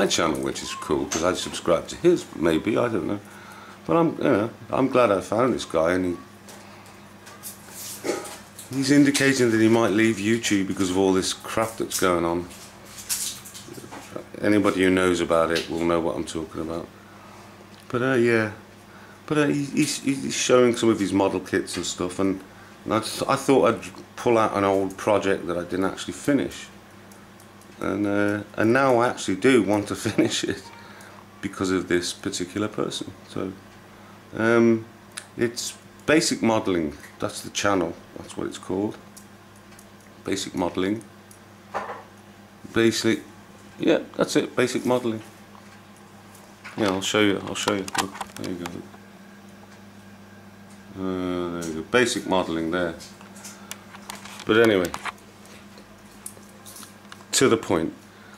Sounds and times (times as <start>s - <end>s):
Speech: 0.0s - 3.3s, 3.9s - 6.3s, 8.7s - 12.6s, 13.7s - 16.9s, 17.9s - 18.6s, 19.3s - 26.8s, 27.8s - 30.8s, 31.4s - 33.6s, 34.3s - 39.0s, 40.2s - 41.1s, 42.7s - 45.3s, 46.8s - 49.0s, 50.9s - 53.1s, 54.4s - 55.1s, 57.3s - 58.0s.